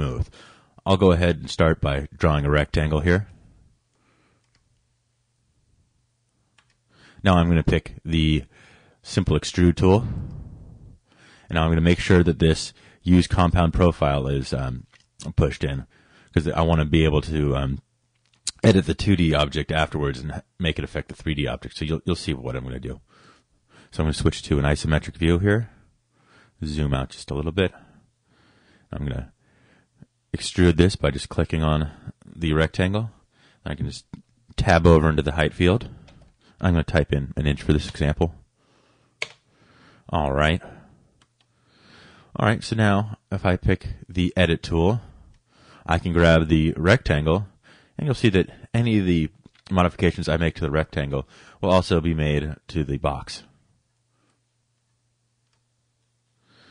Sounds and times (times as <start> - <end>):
Speech: 0.0 - 3.4, 7.2 - 10.2, 11.5 - 17.9, 18.5 - 23.1, 23.9 - 25.8, 26.6 - 27.9, 28.9 - 29.4, 30.3 - 36.0, 36.6 - 38.4, 40.1 - 40.9, 42.3 - 45.2, 45.8 - 53.5.